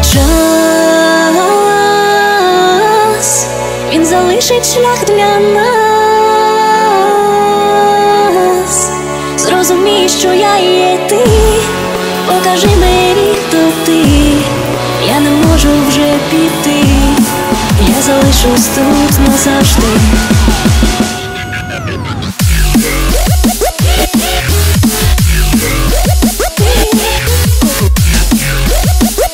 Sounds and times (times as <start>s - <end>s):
Music: 0.0s - 29.3s.